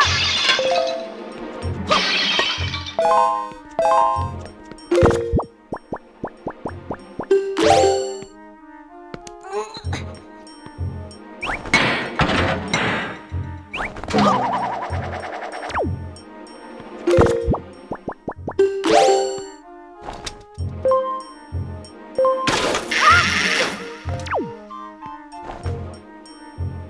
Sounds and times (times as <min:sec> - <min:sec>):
Music: 0:00.0 - 0:26.9.